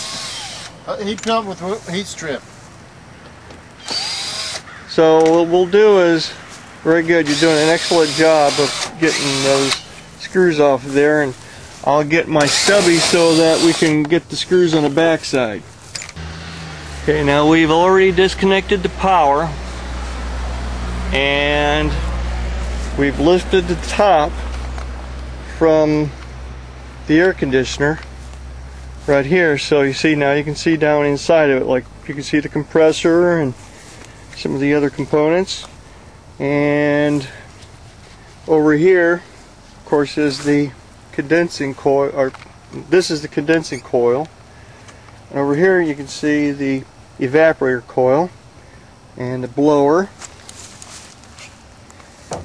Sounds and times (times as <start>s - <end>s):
Speech: 0.9s - 2.4s, 4.9s - 15.6s, 17.0s - 19.6s, 21.1s - 22.0s, 23.0s - 24.4s, 25.5s - 26.1s, 27.1s - 28.0s, 29.0s - 33.6s, 34.4s - 35.7s, 36.4s - 37.4s, 38.5s - 39.2s, 39.9s - 44.3s, 45.3s - 48.4s, 49.2s - 50.2s.